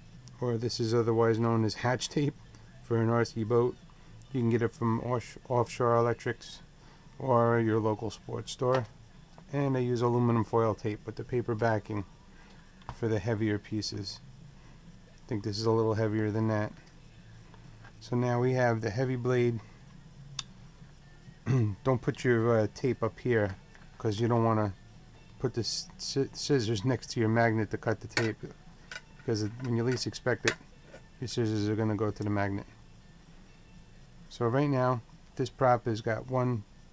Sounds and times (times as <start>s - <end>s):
Music: 0.0s - 36.9s
Speech: 0.4s - 6.6s, 7.2s - 8.9s, 9.5s - 12.1s, 12.9s - 14.2s, 15.3s - 16.8s, 18.0s - 19.7s, 21.5s - 24.8s, 25.4s - 28.6s, 29.3s - 30.6s, 31.2s - 32.7s, 34.3s - 36.6s.